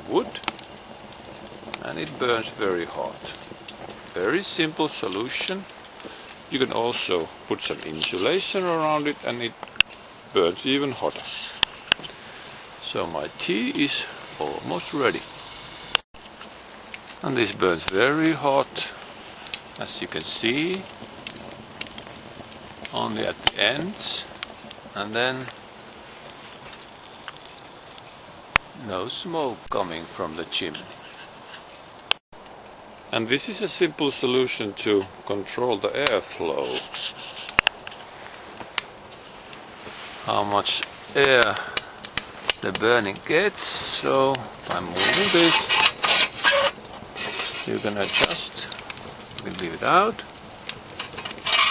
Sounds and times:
Speech: 0:00.0 - 0:00.4, 0:01.8 - 0:03.4, 0:04.2 - 0:05.7, 0:06.5 - 0:09.6, 0:10.4 - 0:11.6, 0:12.8 - 0:15.2, 0:17.2 - 0:19.0, 0:19.8 - 0:20.9, 0:22.9 - 0:24.4, 0:25.0 - 0:25.6, 0:28.8 - 0:31.0, 0:33.1 - 0:36.9, 0:40.2 - 0:41.7, 0:42.6 - 0:45.7, 0:47.3 - 0:48.8, 0:49.4 - 0:50.3
Fire: 0:00.0 - 0:51.7.

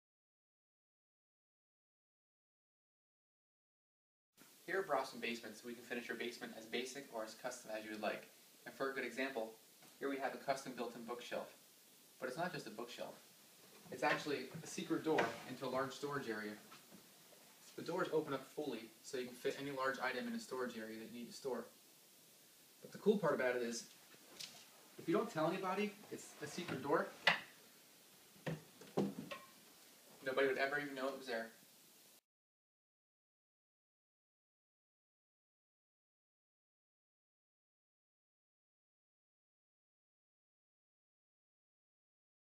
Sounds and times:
Speech: 0:04.7 - 0:11.6, 0:12.2 - 0:13.2, 0:13.9 - 0:16.7, 0:17.7 - 0:21.8, 0:22.8 - 0:23.9, 0:25.0 - 0:27.2, 0:30.2 - 0:31.6.

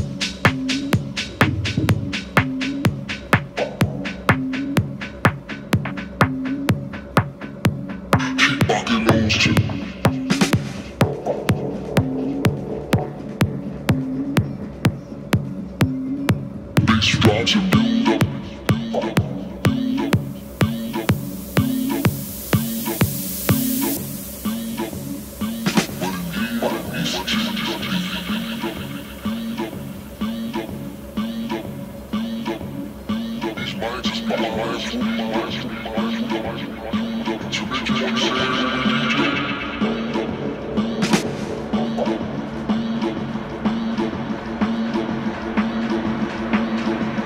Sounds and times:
Music: 0:00.0 - 0:47.2
Outside, urban or manmade: 0:00.0 - 0:47.2.

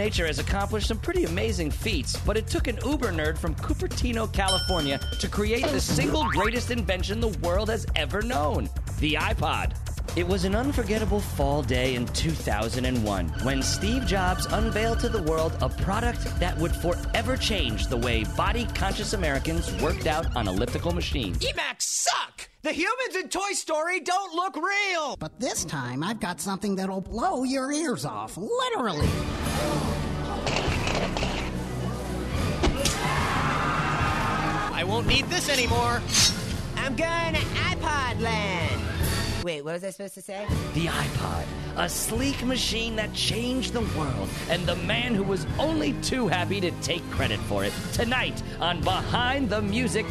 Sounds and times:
Music: 0:00.0 - 0:21.6, 0:25.3 - 0:50.1
Speech: 0:00.0 - 0:29.1, 0:34.7 - 0:36.0, 0:39.4 - 0:50.1.

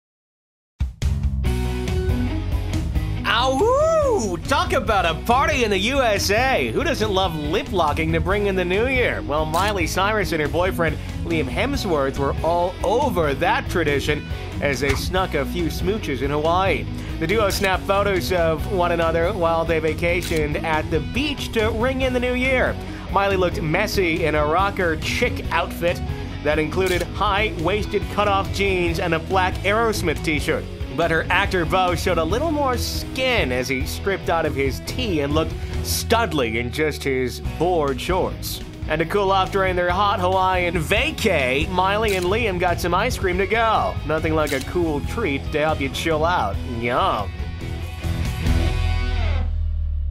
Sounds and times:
Music: 0:00.8 - 0:50.1
Speech: 0:03.3 - 0:47.3.

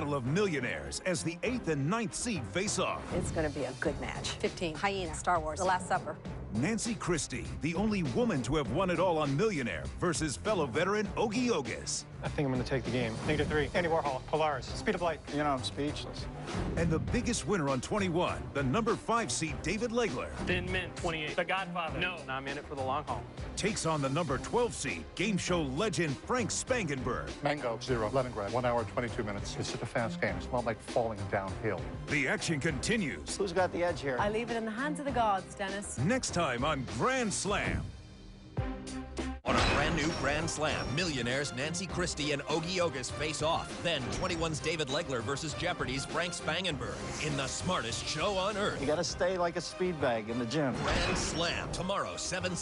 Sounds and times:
Music: 0:00.0 - 0:52.6.

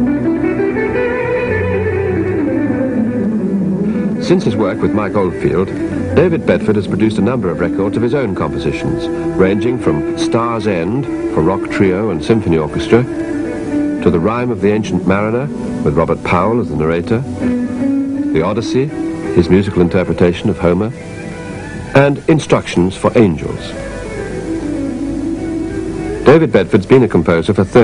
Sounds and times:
Music: 0:00.0 - 0:27.8
Speech: 0:04.2 - 0:13.1, 0:14.0 - 0:17.3, 0:18.3 - 0:21.0, 0:21.9 - 0:23.8, 0:26.2 - 0:27.8.

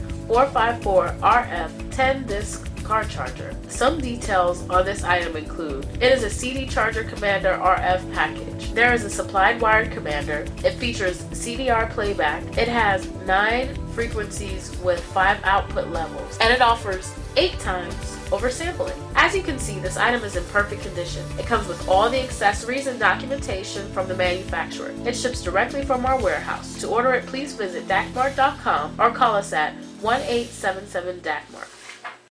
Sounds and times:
Music: 0:00.0 - 0:32.3
Speech: 0:00.3 - 0:31.8.

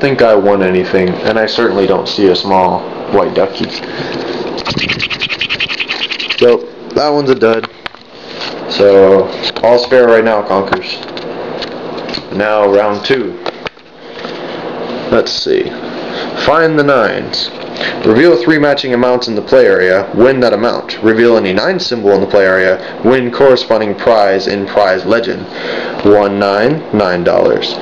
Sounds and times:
Speech: 0:00.0 - 0:03.7, 0:06.4 - 0:07.7, 0:08.7 - 0:11.1, 0:12.3 - 0:13.4, 0:15.1 - 0:15.8, 0:16.4 - 0:27.8
Scratch: 0:04.6 - 0:06.6.

